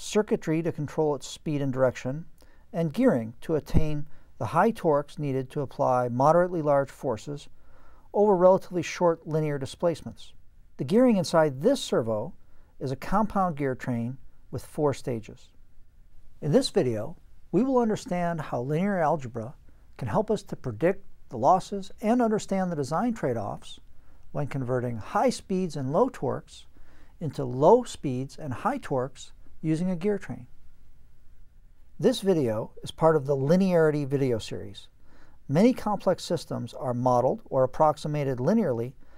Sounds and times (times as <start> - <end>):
Speech: 0.0 - 7.5, 8.1 - 15.6, 16.4 - 23.8, 24.4 - 30.5, 32.0 - 34.9, 35.5 - 39.0.